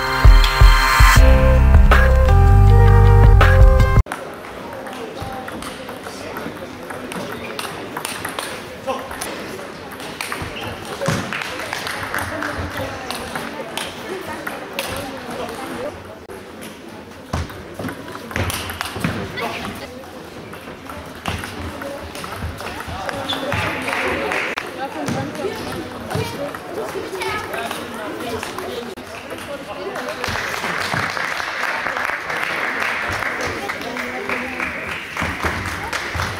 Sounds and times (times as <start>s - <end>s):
Inside, large room or hall: 0.0s - 36.3s
Speech: 4.2s - 30.8s, 31.6s - 36.3s.